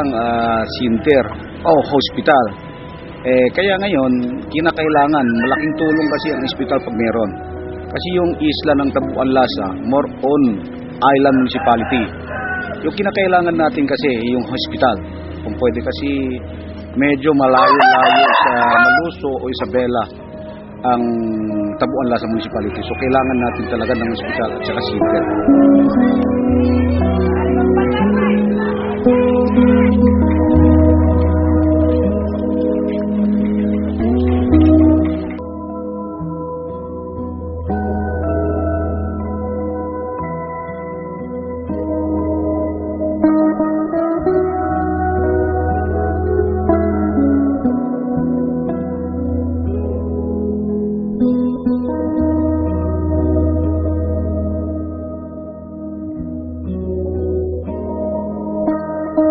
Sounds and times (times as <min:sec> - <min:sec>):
Music: 0:00.0 - 0:59.3
Speech: 0:20.9 - 0:25.2, 0:27.2 - 0:29.0.